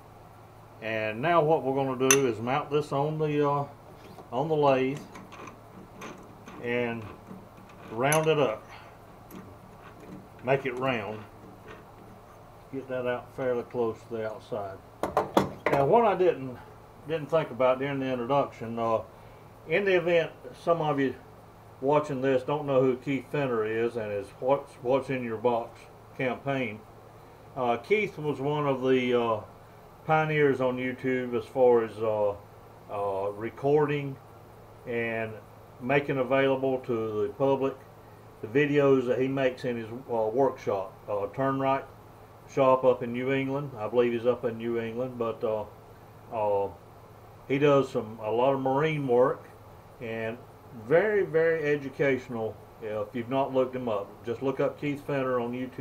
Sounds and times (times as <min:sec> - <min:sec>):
Tools: 0:02.1 - 0:02.3, 0:05.0 - 0:10.5, 0:11.1 - 0:12.4.